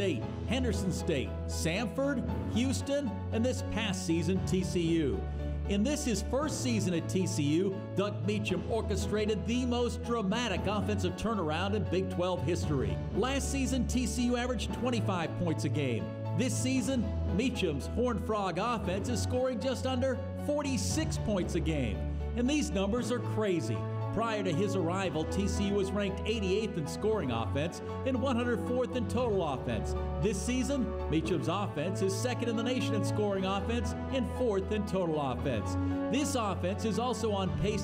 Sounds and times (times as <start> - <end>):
Male speech, man speaking: 0.0 - 37.8
Music: 0.0 - 37.8
Narration, monologue: 0.0 - 37.8.